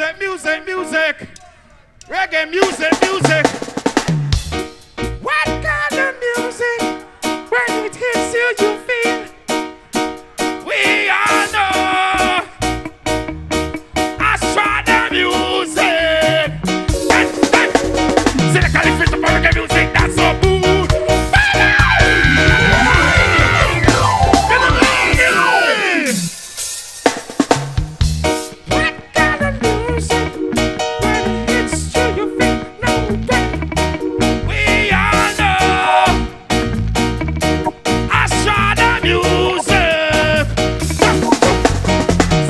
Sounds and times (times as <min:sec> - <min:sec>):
Reggae: 0:00.0 - 0:42.4.